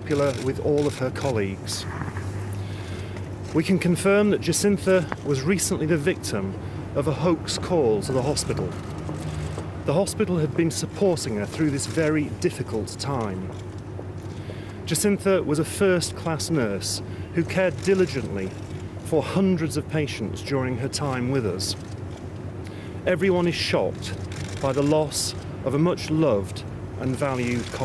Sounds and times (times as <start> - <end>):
Speech: 0.0 - 1.9, 3.6 - 8.8, 9.9 - 13.5, 14.9 - 21.8, 23.1 - 27.8.